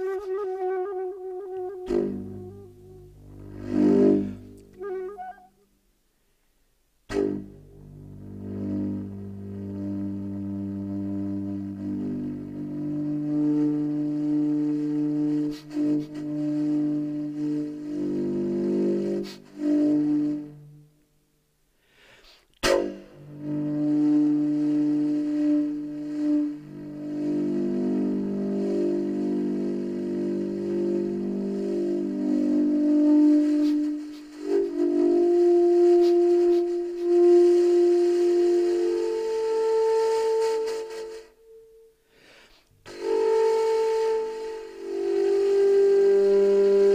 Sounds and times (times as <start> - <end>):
Music: 0.0 - 46.9.